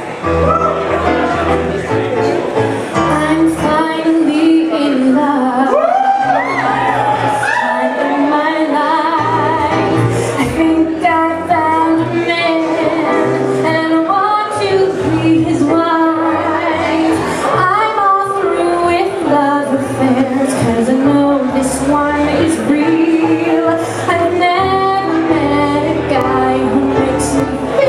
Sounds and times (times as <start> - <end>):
Inside, large room or hall: 0.0 - 27.8
Music: 0.0 - 27.8
Singing: 3.1 - 27.8.